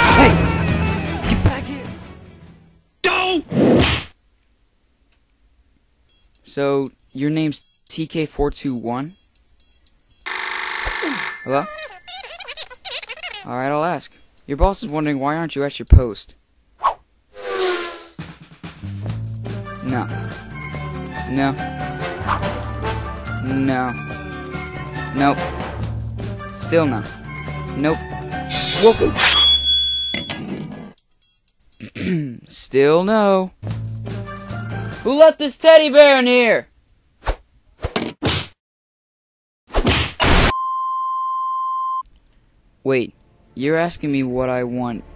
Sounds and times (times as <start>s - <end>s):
Speech: 3.0s - 3.5s, 13.4s - 16.4s, 26.6s - 27.1s, 32.0s - 33.6s, 35.0s - 36.7s, 42.9s - 45.0s.